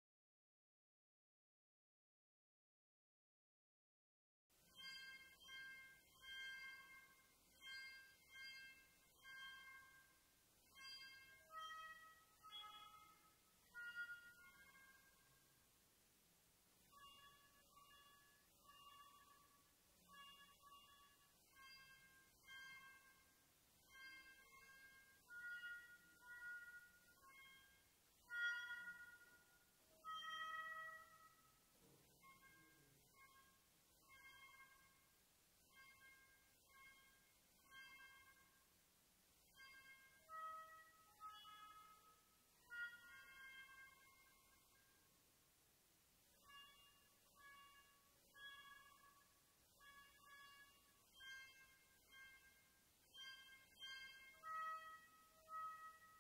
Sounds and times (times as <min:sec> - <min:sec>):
Music: 0:04.5 - 0:56.2.